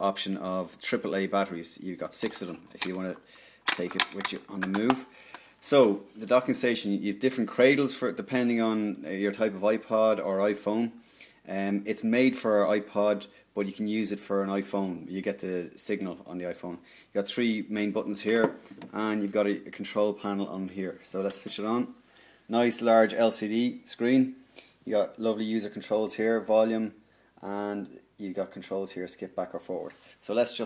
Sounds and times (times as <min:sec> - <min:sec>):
Speech: 0:00.0 - 0:30.6.